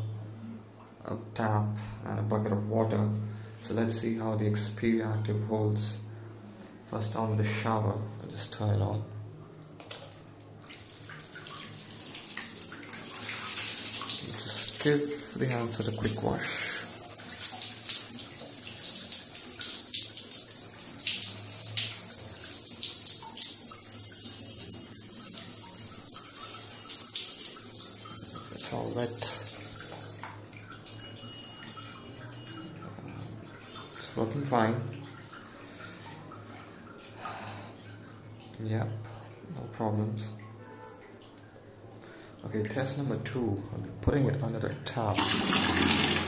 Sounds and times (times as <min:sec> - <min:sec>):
Water: 0:00.0 - 0:46.2.